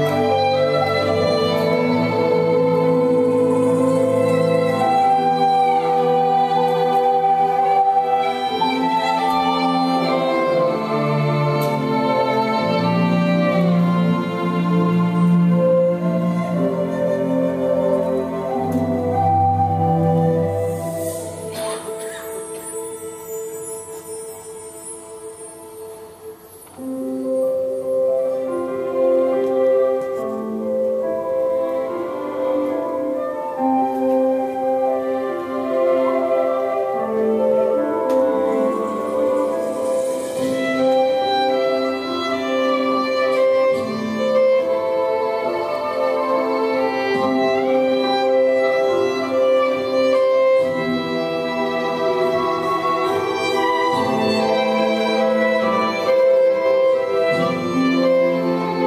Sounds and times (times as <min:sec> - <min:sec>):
Music: 0:00.0 - 0:58.8.